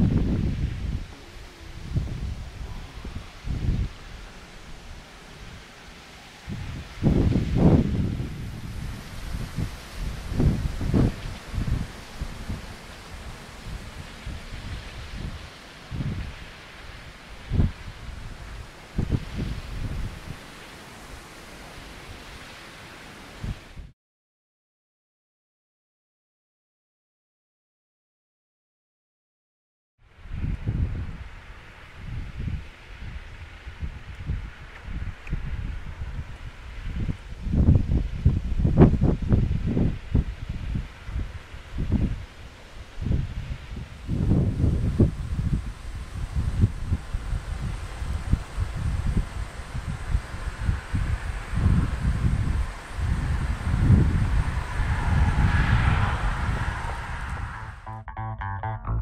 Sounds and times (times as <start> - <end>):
Wind: 0.0 - 24.0, 30.0 - 59.0.